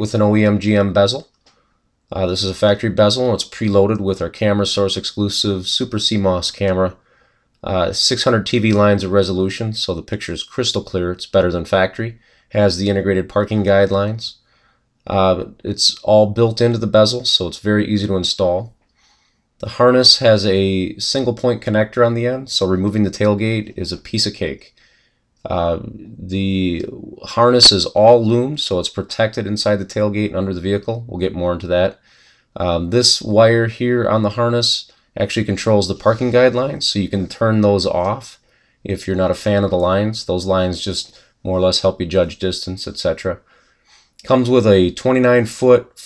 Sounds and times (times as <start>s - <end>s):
Speech: 0.0s - 1.3s, 2.1s - 7.0s, 7.6s - 14.4s, 15.1s - 18.8s, 19.6s - 24.8s, 25.4s - 43.5s, 44.2s - 46.0s.